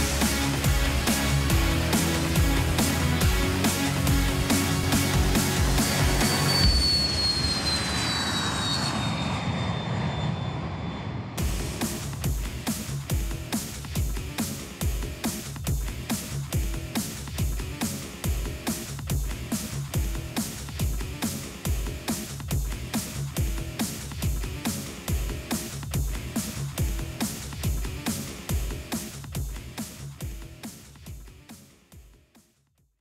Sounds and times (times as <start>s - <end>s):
Music: 0.0s - 7.1s, 11.4s - 33.0s
Aircraft engine: 6.3s - 12.0s.